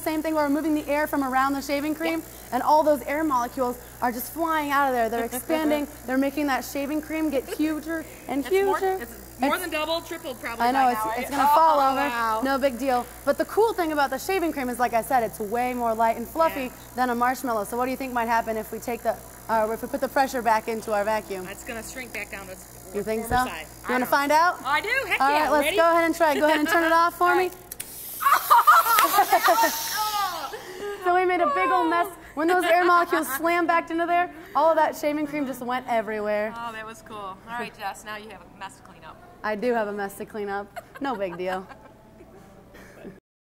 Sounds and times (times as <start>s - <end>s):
Female speech, woman speaking: 0.0s - 27.6s, 29.4s - 41.8s.